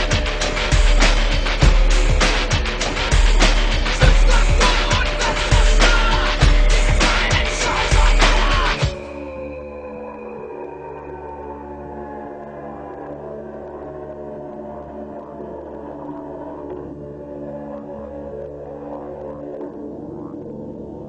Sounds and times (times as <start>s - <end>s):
Rock music: 0.0s - 9.3s.